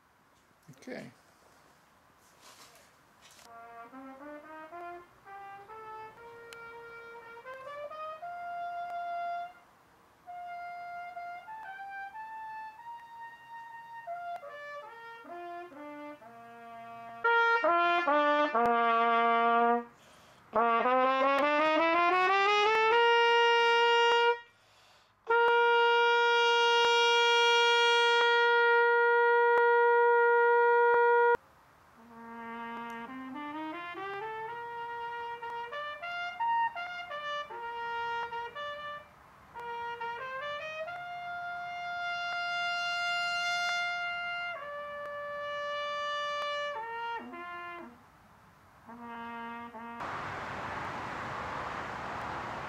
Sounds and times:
Music: 3.6 - 9.6, 10.3 - 19.6, 32.0 - 38.6.

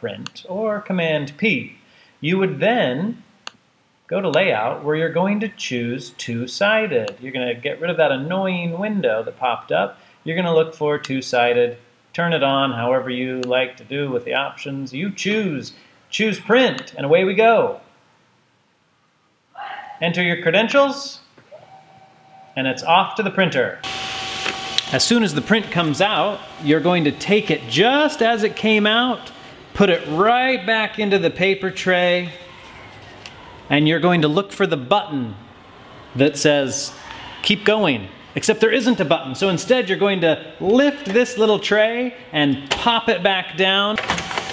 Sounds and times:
Speech: 0.0 - 3.2, 4.1 - 17.8, 19.6 - 21.3, 22.6 - 23.8, 24.9 - 32.4, 33.7 - 35.4, 36.2 - 44.0
Printer: 23.9 - 30.2, 44.0 - 44.5.

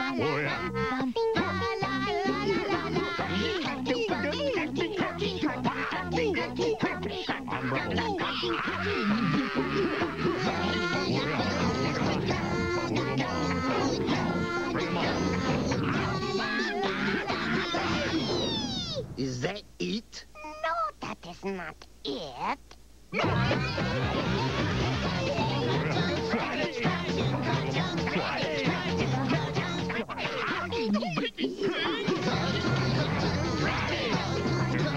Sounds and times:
Music: 0.0 - 18.2, 23.2 - 30.9, 31.6 - 34.9
Speech: 16.7 - 22.8.

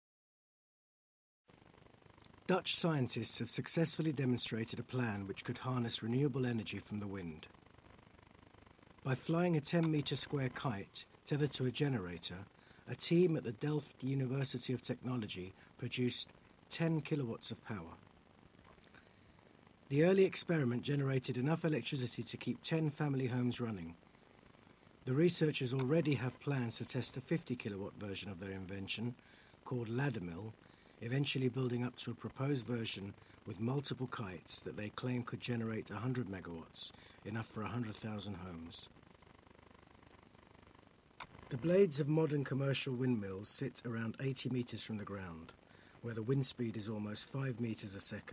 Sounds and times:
Speech: 2.5 - 7.5, 9.0 - 18.0, 19.9 - 24.0, 25.0 - 38.9, 41.5 - 48.3.

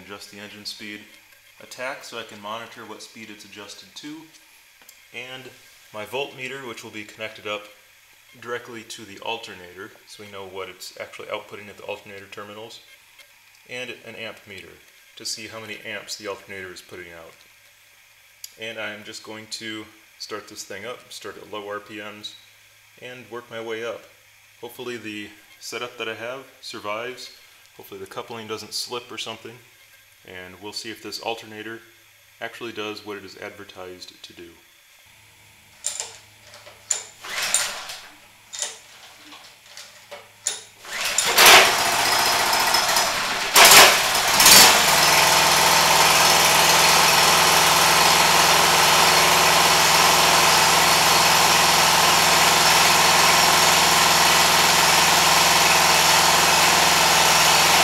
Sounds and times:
Engine: 35.8 - 57.8.

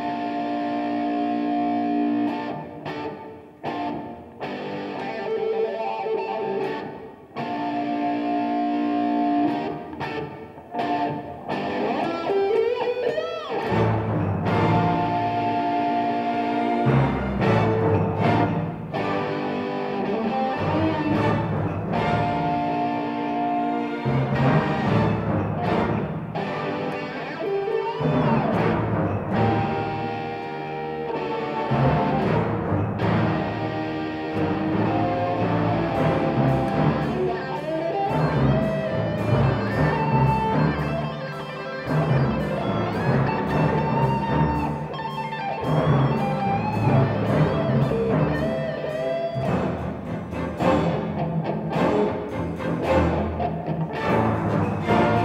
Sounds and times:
Orchestra: 0.0 - 55.2
Strum: 13.1 - 55.2.

